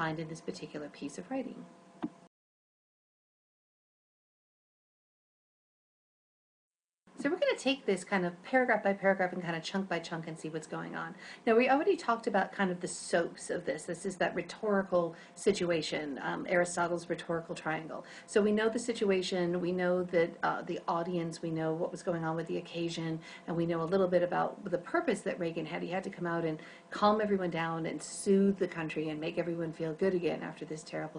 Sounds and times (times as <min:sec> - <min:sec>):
Female speech, woman speaking: 0:00.0 - 0:01.7, 0:07.2 - 0:31.1
Narration, monologue: 0:00.0 - 0:02.3, 0:07.1 - 0:31.1.